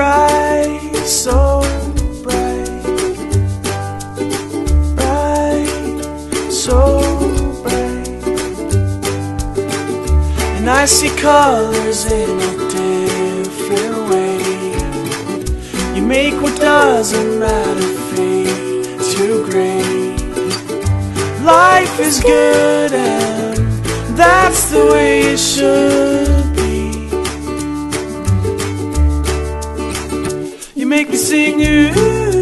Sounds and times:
Music: 0:00.0 - 0:32.4.

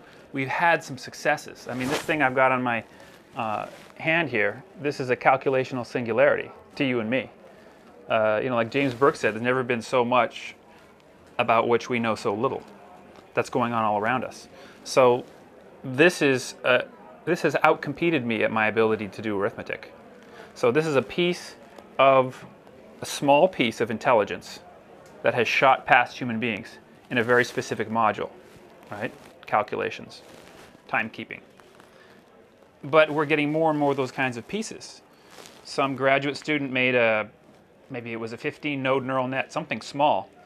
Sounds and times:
Speech: 0:00.3 - 0:07.4, 0:08.0 - 0:10.6, 0:11.4 - 0:30.2, 0:30.9 - 0:31.4, 0:32.8 - 0:35.0, 0:35.6 - 0:40.4.

